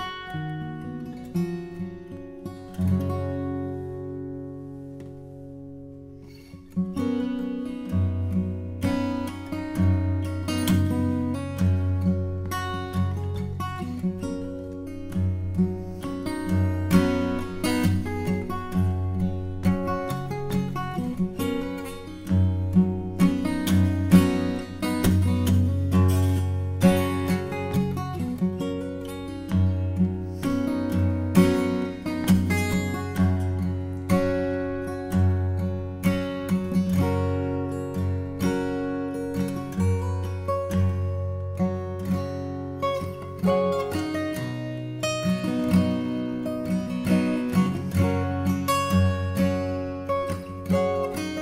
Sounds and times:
Acoustic guitar: 0.0s - 51.4s
Strum: 0.0s - 51.4s.

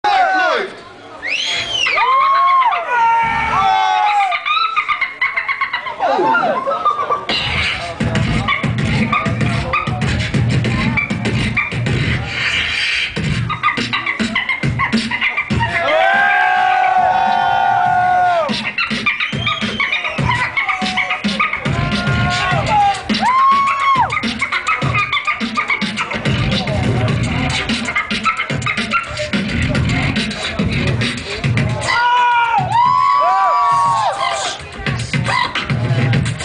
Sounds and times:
Beatboxing: 4.1s - 36.4s.

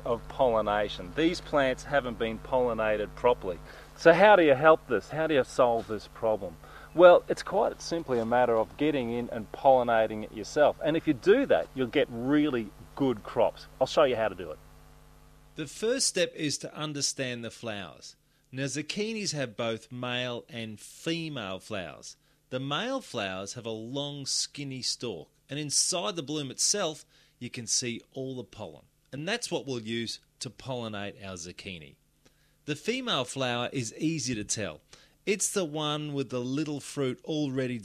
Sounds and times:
Speech: 0.0s - 14.6s, 15.6s - 32.0s, 32.7s - 37.8s.

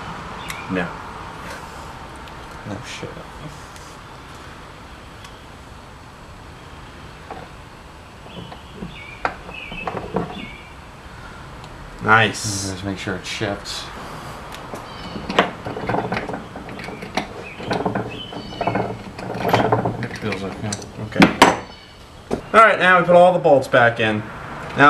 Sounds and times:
Speech: 0.7s - 1.0s, 2.7s - 3.6s, 12.0s - 14.0s, 20.0s - 21.4s, 22.5s - 24.8s.

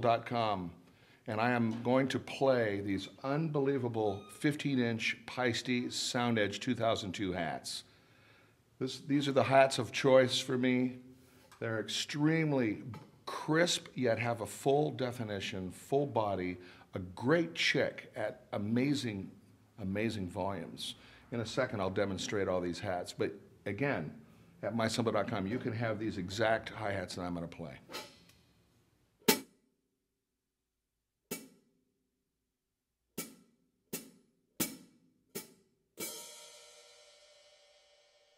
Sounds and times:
Speech: 0.0s - 7.9s, 8.8s - 11.0s, 11.6s - 27.9s.

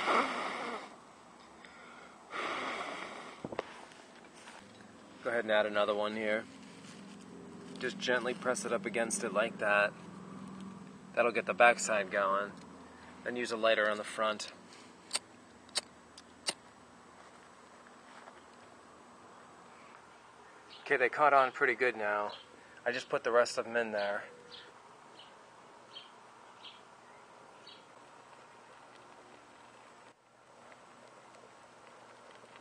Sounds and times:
Speech: 5.2s - 6.5s, 7.8s - 9.9s, 11.2s - 12.5s, 13.2s - 14.6s, 20.8s - 24.3s.

